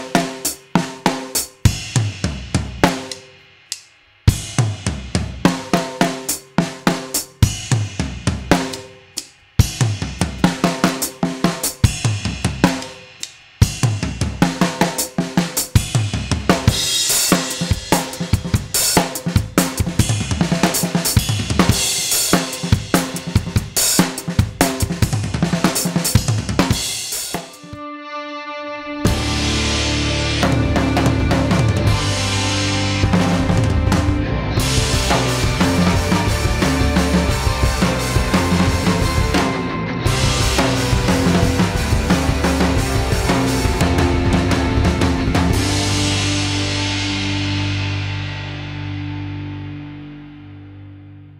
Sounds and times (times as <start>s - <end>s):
Music: 0.0s - 51.4s.